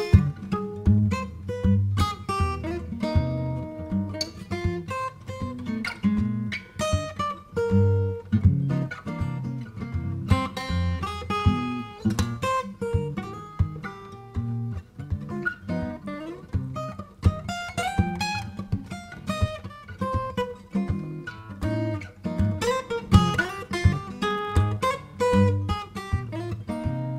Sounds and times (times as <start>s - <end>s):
Acoustic guitar: 0.0s - 27.1s
Strum: 0.0s - 27.1s.